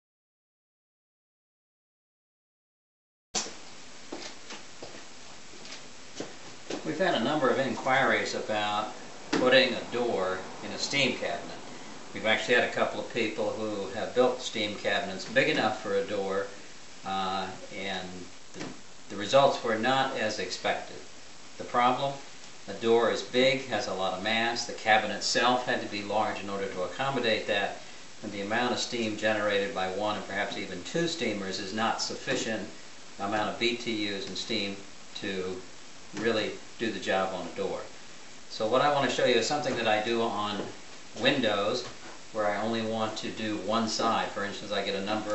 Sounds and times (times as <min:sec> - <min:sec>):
Speech: 0:06.8 - 0:45.3.